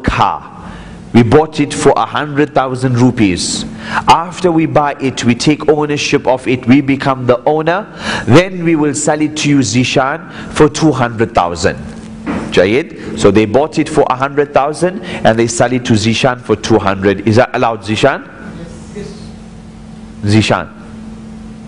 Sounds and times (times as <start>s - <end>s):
Speech: 0.0s - 0.6s, 1.2s - 11.9s, 12.6s - 19.4s, 20.2s - 20.9s.